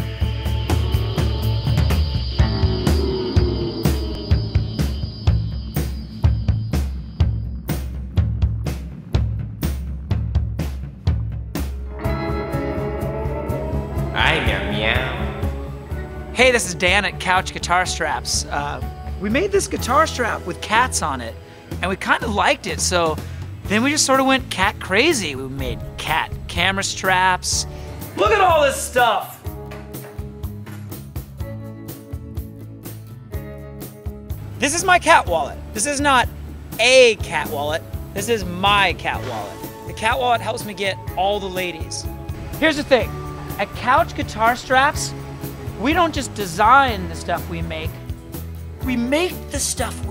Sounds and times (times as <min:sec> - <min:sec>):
Music: 0:00.0 - 0:50.1
Speech: 0:14.2 - 0:15.4, 0:16.4 - 0:29.4, 0:34.6 - 0:45.1, 0:45.8 - 0:48.0, 0:48.8 - 0:50.1.